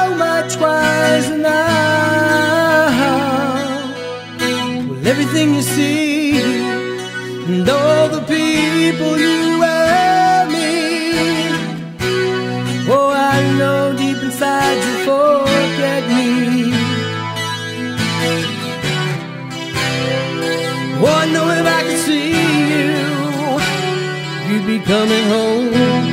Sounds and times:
Music: 0.0 - 26.1.

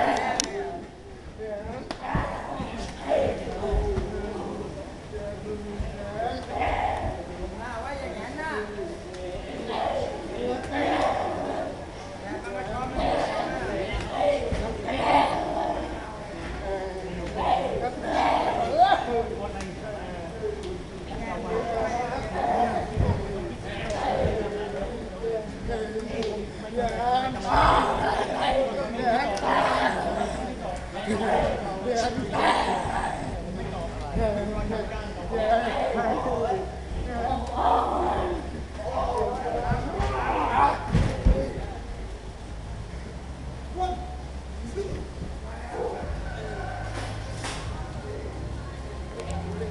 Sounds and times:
Male speech, man speaking: 0.0 - 42.1, 43.8 - 46.8, 47.8 - 49.7
Chatter: 0.0 - 49.7.

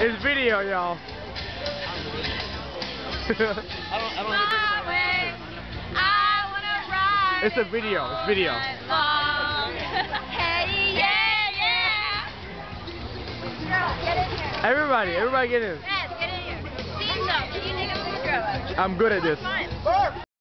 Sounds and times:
Music: 0.0 - 20.3.

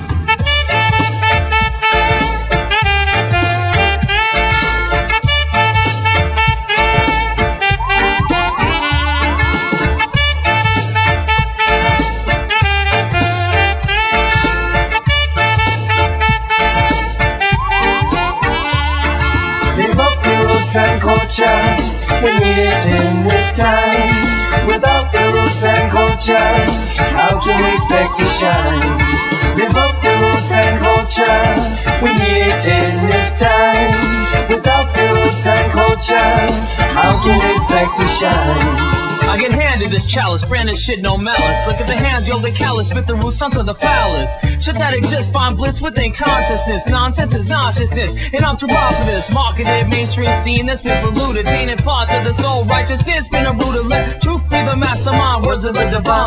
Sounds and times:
Funk: 0.0 - 56.2.

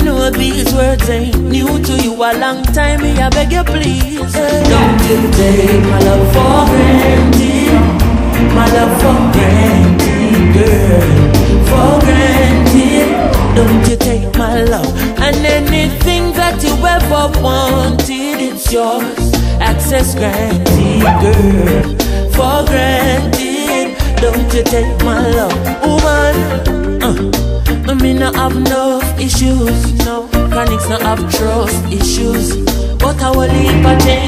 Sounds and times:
Music of Africa: 0.0 - 34.2.

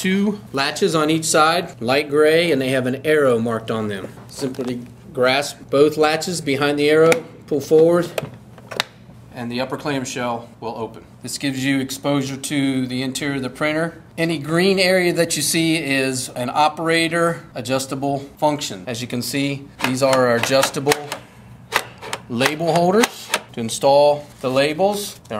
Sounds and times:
Speech: 0.0 - 8.2, 9.3 - 21.2, 22.3 - 25.3.

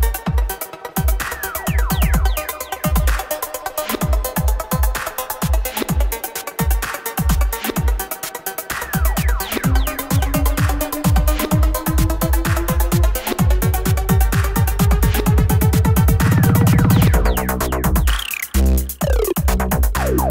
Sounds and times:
Dubstep: 8.7 - 20.3.

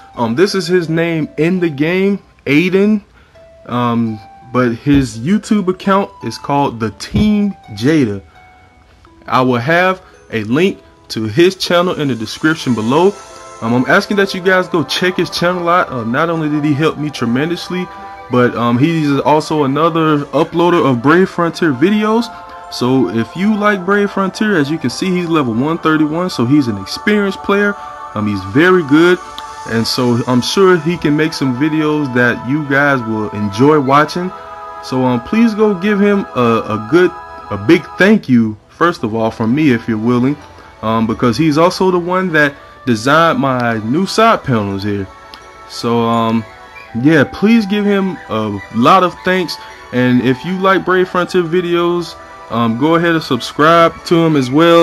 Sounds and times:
Music: 0.0 - 54.8
Speech: 0.2 - 3.1, 3.7 - 8.2, 9.3 - 34.3, 34.9 - 45.1, 45.7 - 54.8.

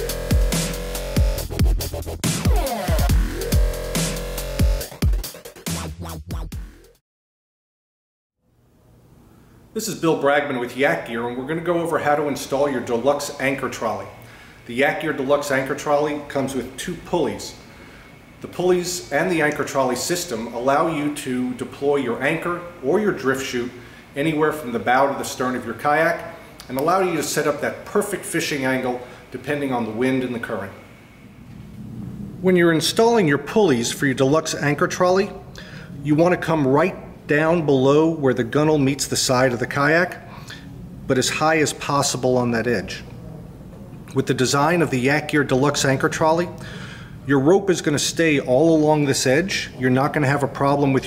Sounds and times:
Speech: 9.8 - 17.6, 18.4 - 30.8, 32.4 - 35.4, 36.0 - 40.3, 41.1 - 43.2, 44.1 - 46.6, 47.3 - 51.0.

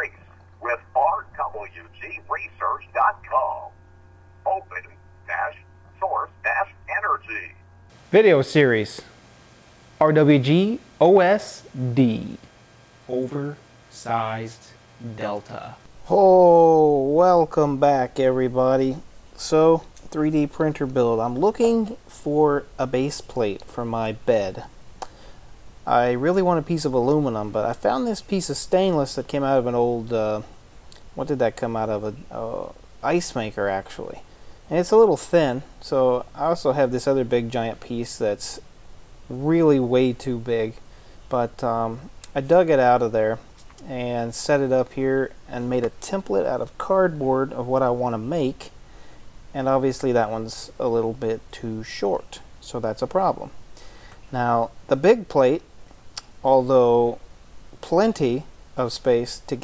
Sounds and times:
Speech: 0.0 - 3.8, 4.4 - 9.1, 10.0 - 12.5, 13.1 - 24.7, 25.9 - 30.5, 31.2 - 38.6, 39.3 - 48.8, 49.6 - 53.6, 54.3 - 55.7, 56.4 - 57.2, 57.8 - 59.6.

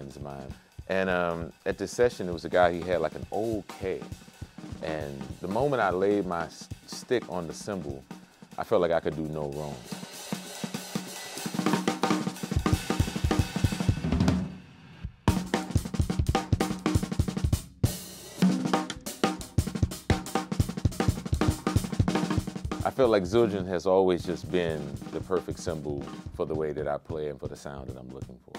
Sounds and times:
Speech: 0.0 - 4.1, 4.8 - 8.0, 8.6 - 9.8, 22.8 - 28.5
Hi-hat: 0.0 - 11.6
Drum: 0.0 - 28.5
Drum kit: 0.0 - 28.5.

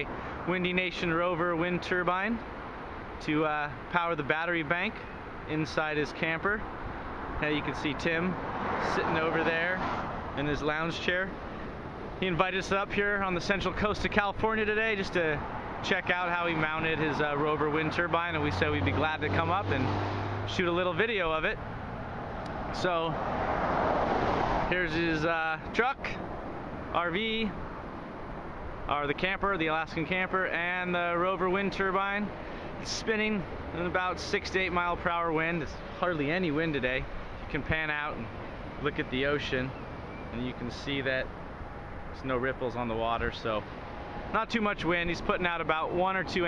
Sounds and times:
Speech: 0.0 - 2.4, 3.2 - 6.6, 7.4 - 11.4, 12.2 - 21.6, 22.8 - 23.2, 24.7 - 26.2, 26.9 - 27.6, 28.9 - 41.3, 42.2 - 43.7, 44.3 - 46.4.

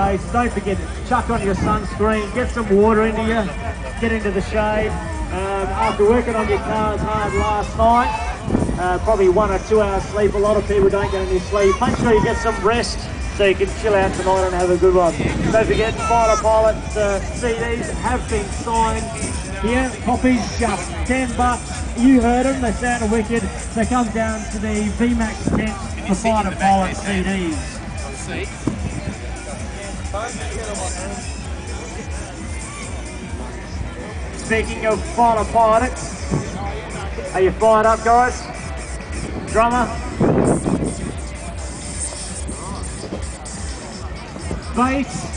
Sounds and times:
Music: 0.0 - 45.3.

